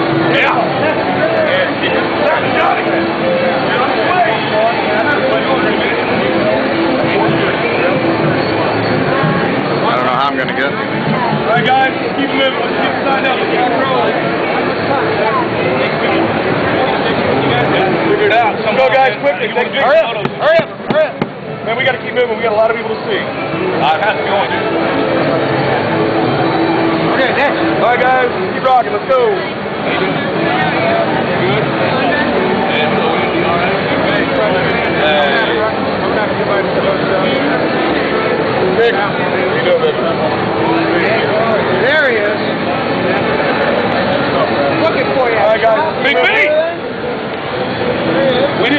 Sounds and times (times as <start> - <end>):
Music: 0.0 - 45.2
Speech: 0.0 - 48.7.